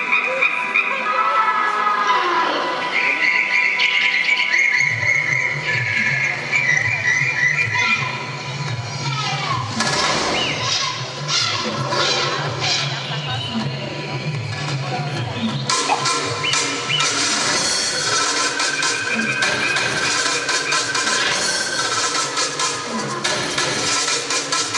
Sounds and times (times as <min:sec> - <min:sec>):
Music: 0:00.0 - 0:24.7
Speech: 0:12.0 - 0:15.5.